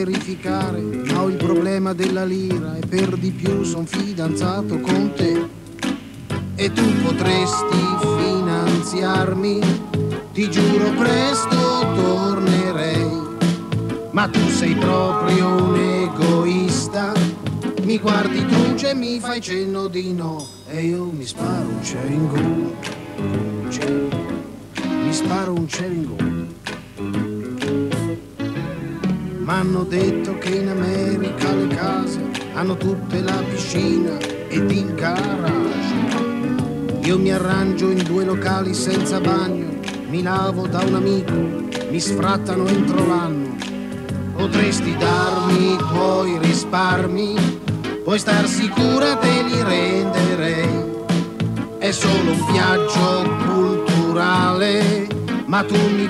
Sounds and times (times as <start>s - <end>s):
Music: 0.0s - 56.0s.